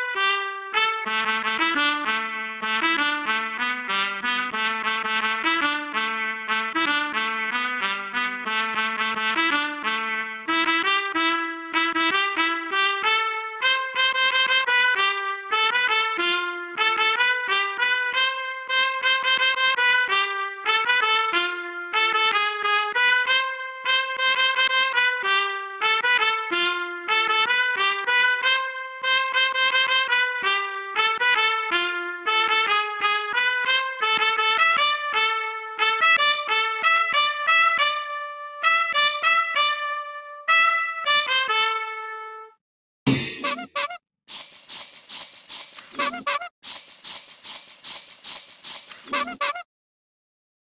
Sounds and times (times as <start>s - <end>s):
Trumpet: 0.0s - 44.0s, 45.8s - 46.5s, 48.9s - 49.7s.